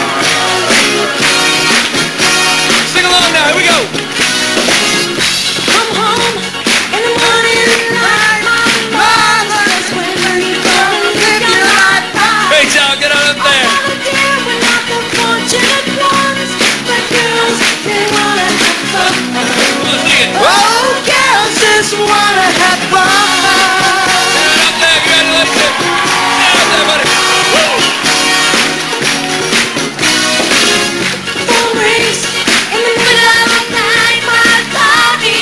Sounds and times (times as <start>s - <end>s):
Music: 0.0s - 35.4s.